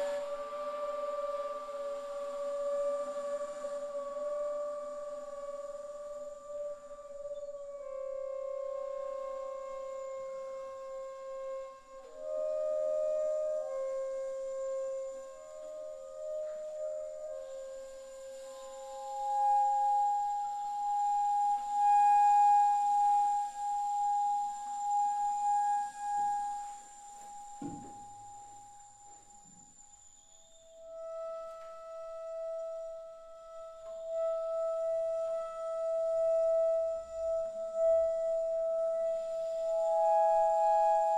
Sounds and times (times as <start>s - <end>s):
Flute: 0.0s - 41.1s.